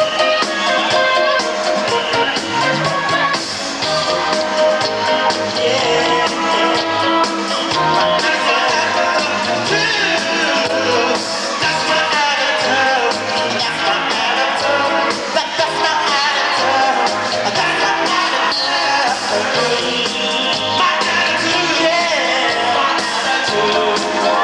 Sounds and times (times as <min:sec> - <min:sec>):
Music: 0:00.0 - 0:24.4
Male singing: 0:05.1 - 0:24.4.